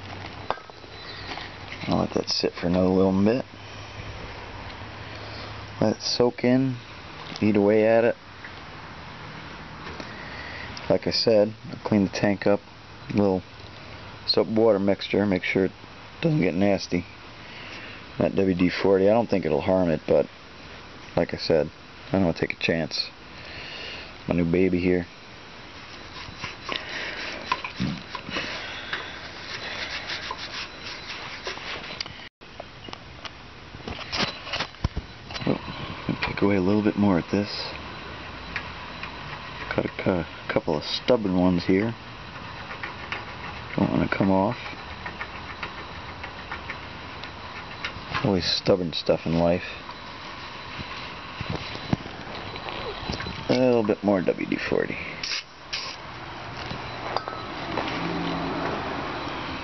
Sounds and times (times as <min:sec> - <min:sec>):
Speech: 0:01.8 - 0:03.5, 0:05.8 - 0:06.8, 0:07.4 - 0:08.2, 0:10.9 - 0:13.4, 0:14.3 - 0:17.1, 0:18.2 - 0:20.3, 0:21.2 - 0:23.2, 0:24.3 - 0:25.1, 0:35.5 - 0:37.8, 0:39.7 - 0:42.0, 0:43.8 - 0:44.6, 0:48.2 - 0:49.8, 0:53.5 - 0:55.1.